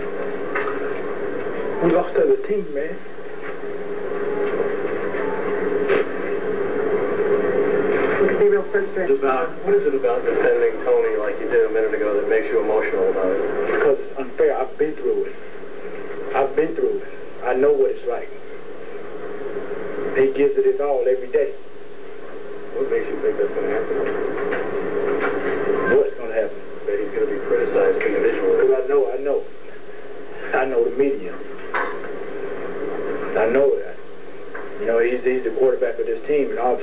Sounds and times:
Speech: 0:01.8 - 0:03.0, 0:08.2 - 0:15.3, 0:16.3 - 0:18.4, 0:20.2 - 0:21.6, 0:22.8 - 0:24.0, 0:25.8 - 0:29.5, 0:30.4 - 0:31.5, 0:33.3 - 0:34.0, 0:34.8 - 0:36.8.

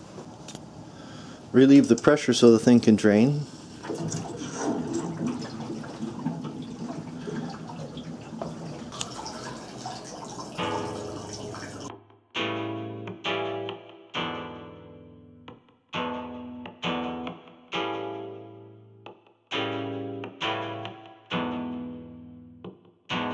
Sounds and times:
Sink (filling or washing): 0:03.8 - 0:11.9
Music: 0:10.5 - 0:23.3.

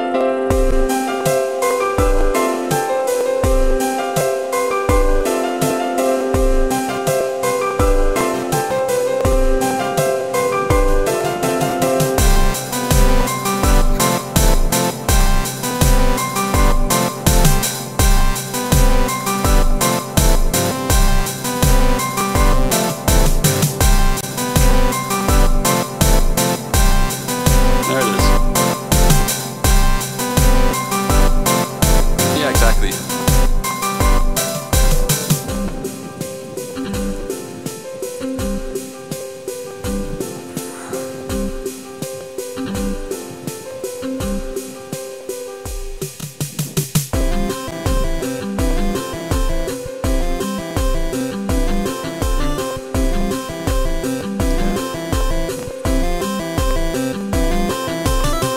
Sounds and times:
Music: 0:00.0 - 0:58.5.

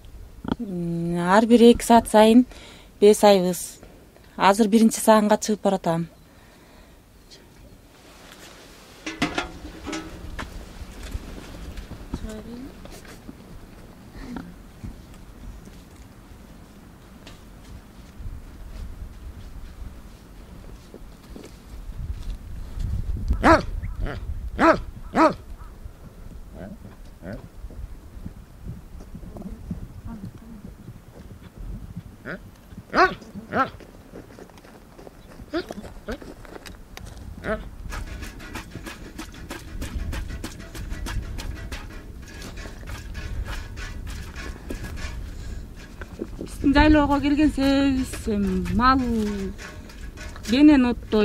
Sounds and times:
Clip-clop: 0:09.2 - 0:51.2.

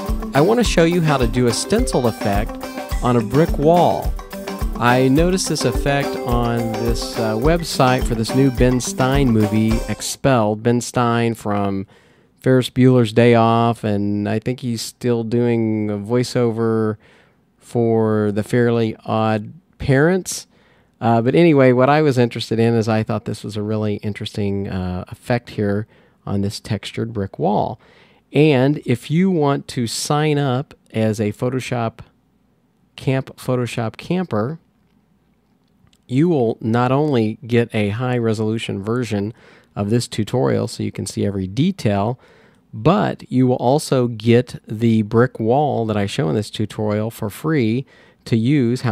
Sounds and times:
Music: 0:00.0 - 0:10.1
Speech: 0:00.4 - 0:04.1, 0:04.8 - 0:17.0, 0:17.6 - 0:32.2, 0:33.0 - 0:34.7, 0:36.0 - 0:42.2, 0:42.8 - 0:48.9.

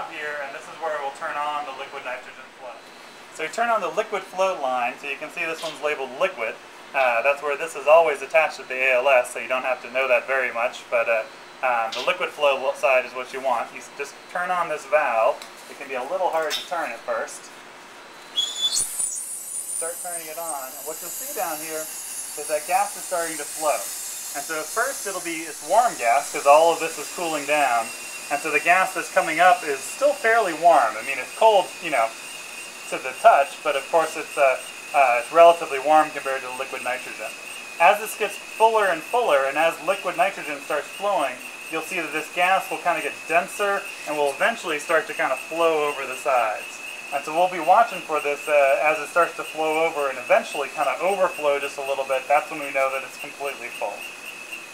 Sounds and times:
Speech: 0:00.0 - 0:02.8, 0:03.4 - 0:17.5, 0:19.8 - 0:32.2, 0:32.9 - 0:54.0.

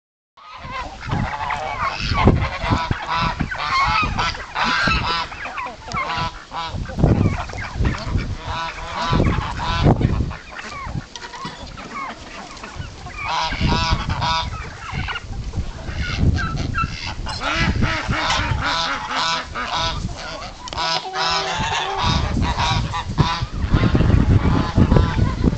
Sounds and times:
Duck: 0:00.4 - 0:25.5
Goose: 0:00.4 - 0:25.5
Bird: 0:08.8 - 0:15.2.

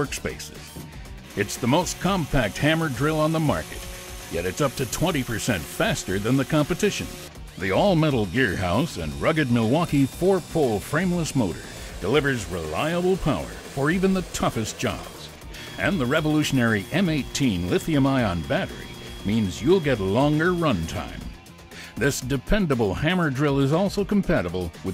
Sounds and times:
Speech: 0:00.0 - 0:00.8, 0:01.4 - 0:21.3, 0:22.0 - 0:24.9
Music: 0:00.0 - 0:24.9.

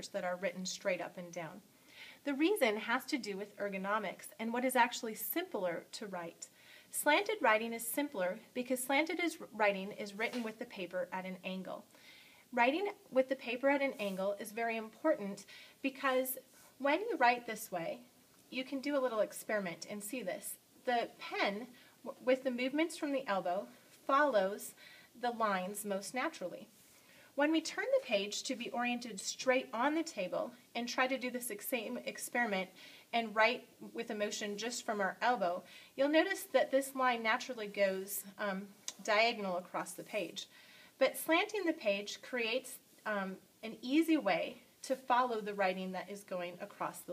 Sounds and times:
Speech: 0:00.0 - 0:01.6, 0:02.2 - 0:11.9, 0:12.5 - 0:26.7, 0:27.4 - 0:47.1.

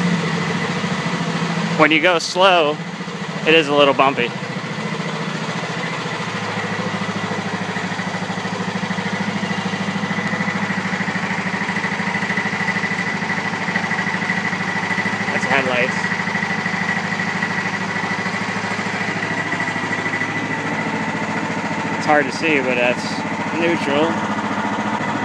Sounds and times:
Engine: 0:00.0 - 0:25.2
Vehicle: 0:00.0 - 0:25.2
Vibration: 0:00.0 - 0:25.2.

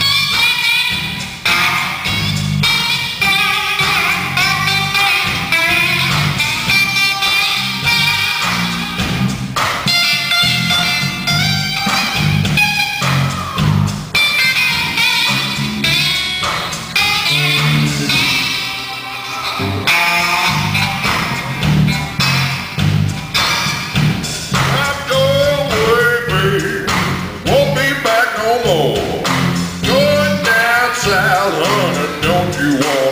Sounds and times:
Bass guitar: 0:00.0 - 0:33.1
Strum: 0:00.0 - 0:33.1.

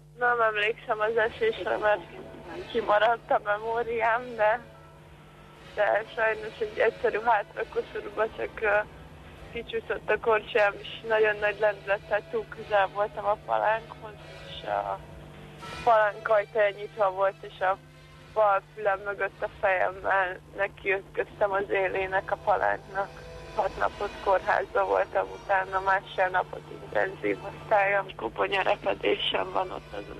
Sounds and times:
Music: 0:00.0 - 0:30.1
Speech: 0:00.2 - 0:04.6, 0:05.8 - 0:08.8, 0:09.6 - 0:15.0, 0:15.9 - 0:17.8, 0:18.4 - 0:30.1.

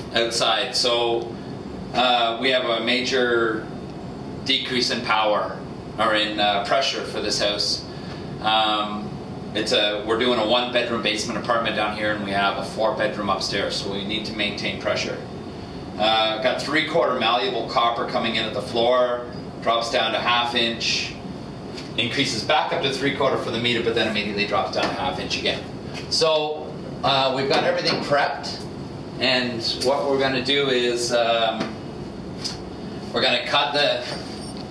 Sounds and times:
Speech: 0:00.1 - 0:01.3, 0:01.9 - 0:03.7, 0:04.5 - 0:15.3, 0:16.0 - 0:21.2, 0:22.0 - 0:31.8, 0:33.1 - 0:34.2.

